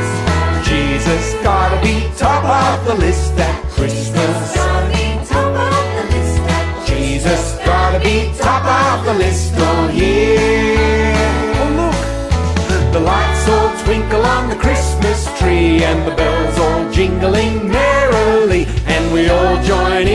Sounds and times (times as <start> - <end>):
Christian music: 0.0 - 20.1
Christmas music: 0.0 - 20.1.